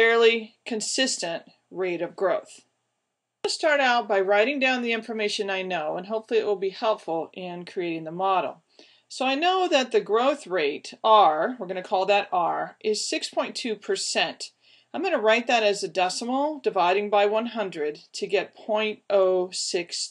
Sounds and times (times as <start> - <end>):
Speech: 0.0 - 2.7, 3.5 - 20.1.